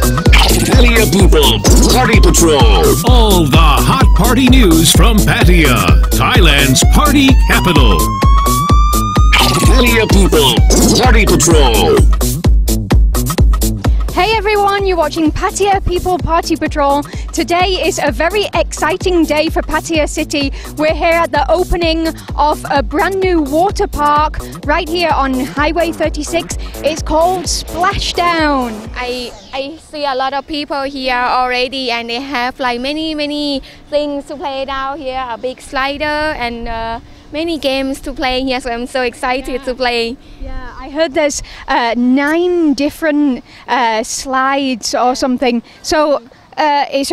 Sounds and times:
Music: 0.0s - 29.4s
Speech: 0.4s - 8.0s, 9.4s - 12.1s, 14.2s - 43.0s, 43.7s - 47.1s.

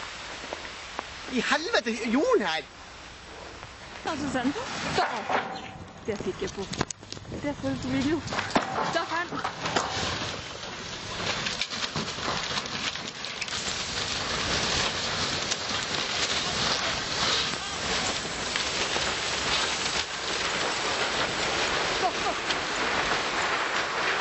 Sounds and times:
Speech: 6.1s - 6.8s.

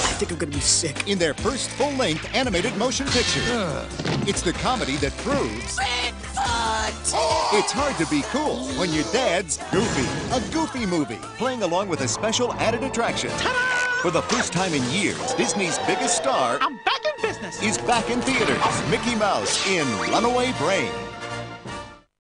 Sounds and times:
Music: 0.0s - 22.1s.

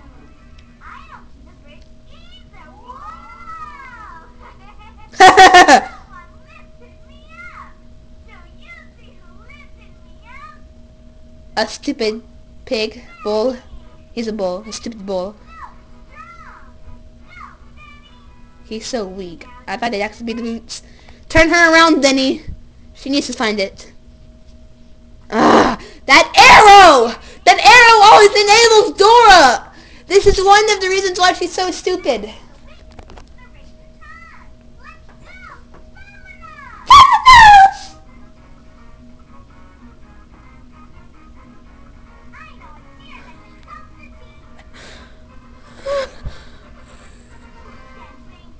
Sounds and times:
Speech: 26.1s - 32.4s.

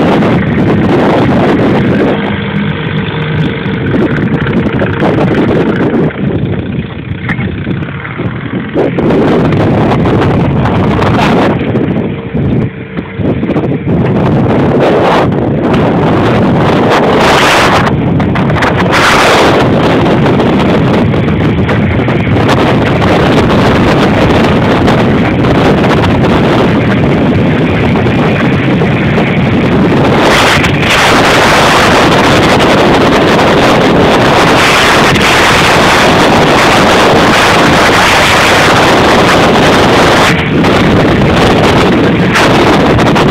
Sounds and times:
Motorboat, speedboat: 0.0s - 43.3s.

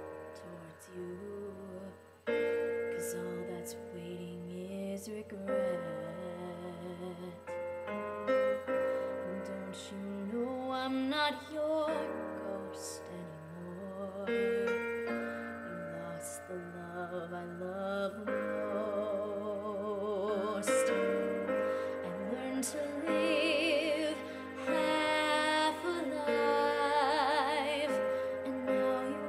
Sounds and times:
Singing: 9.2s - 29.2s.

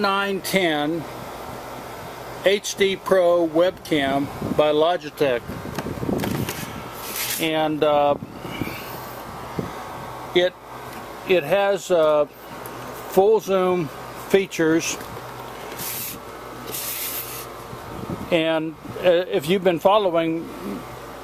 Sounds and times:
Speech: 0.0s - 1.1s, 2.4s - 5.4s, 7.4s - 8.2s, 10.3s - 10.6s, 11.3s - 12.3s, 13.1s - 15.0s, 18.3s - 20.8s.

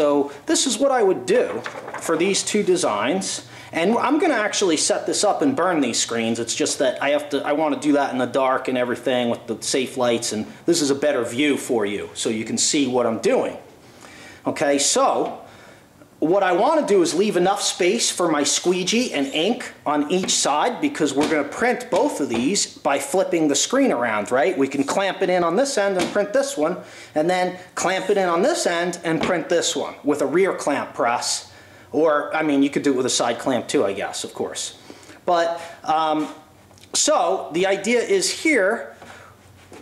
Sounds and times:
Speech: 0.0s - 13.7s, 14.4s - 15.4s, 16.2s - 39.0s
Inside, small room: 0.0s - 39.8s.

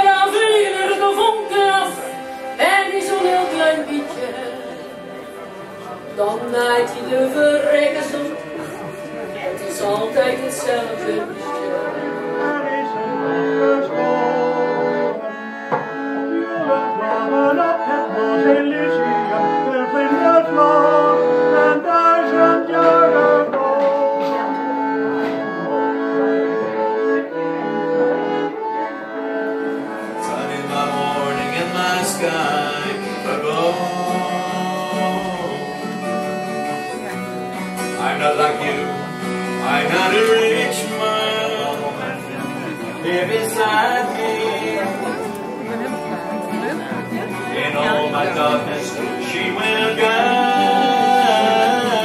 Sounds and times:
Accordion: 0.0s - 52.0s
Speech: 5.4s - 13.4s, 39.6s - 52.0s.

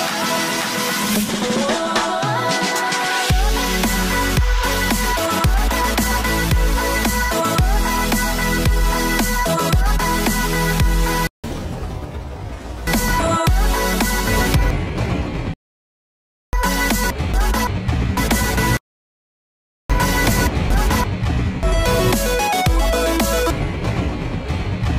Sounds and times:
Music: 0.0s - 11.3s, 12.9s - 15.6s, 16.6s - 18.8s, 19.9s - 24.9s.

